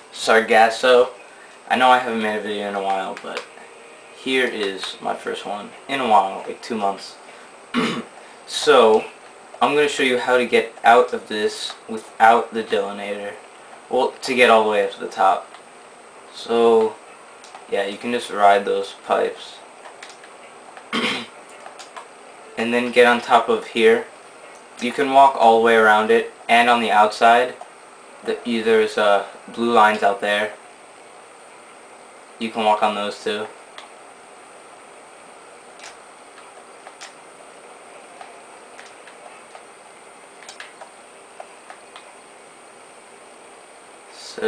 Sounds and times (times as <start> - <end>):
Speech: 0.1 - 3.5, 4.2 - 7.2, 8.5 - 15.5, 16.3 - 17.0, 17.7 - 19.6, 22.6 - 24.1, 24.8 - 27.6, 28.2 - 30.6, 32.4 - 33.6, 44.1 - 44.4.